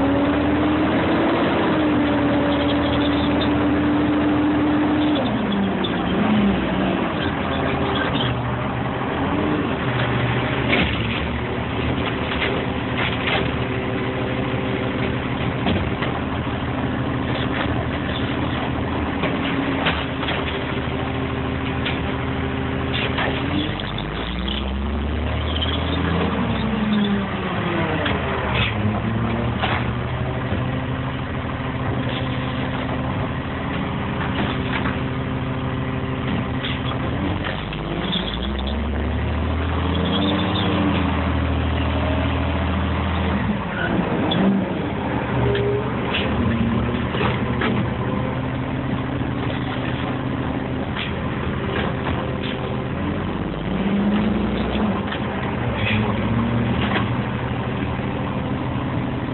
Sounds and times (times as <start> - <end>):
Truck: 0.0 - 59.3.